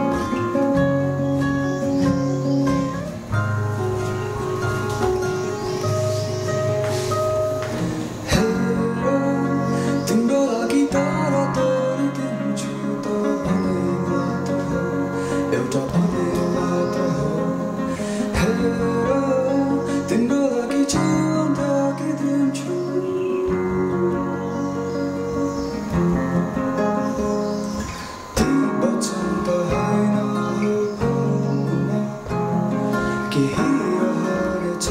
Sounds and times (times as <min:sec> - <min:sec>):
Music: 0:00.0 - 0:34.9.